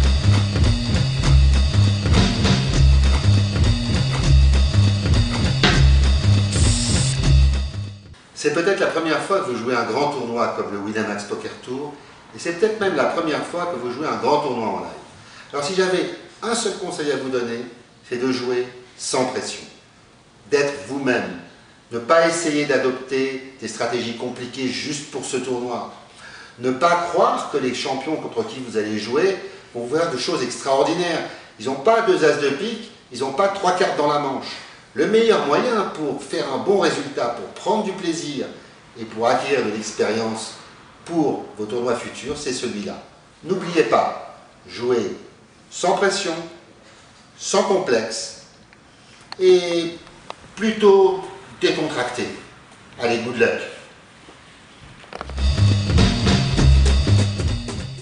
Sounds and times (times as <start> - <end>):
Speech: 8.4 - 19.8, 20.5 - 46.6, 47.4 - 48.5, 49.4 - 53.9.